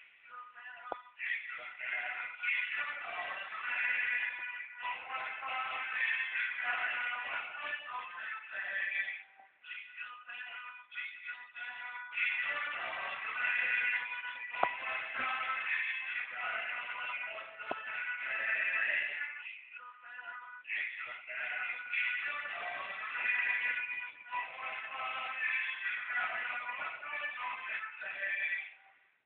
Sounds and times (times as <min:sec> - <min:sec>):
Jingle (music): 0:00.0 - 0:28.9.